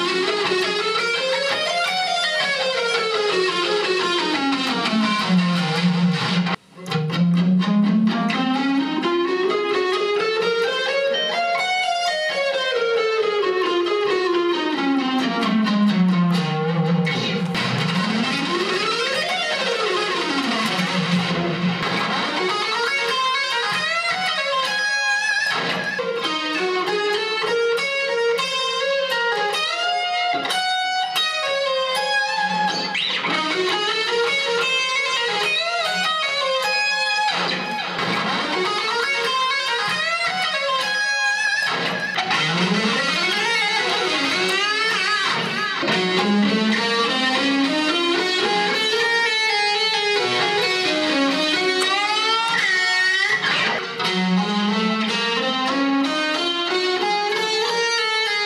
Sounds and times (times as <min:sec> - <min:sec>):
Guitar: 0:00.0 - 0:58.4.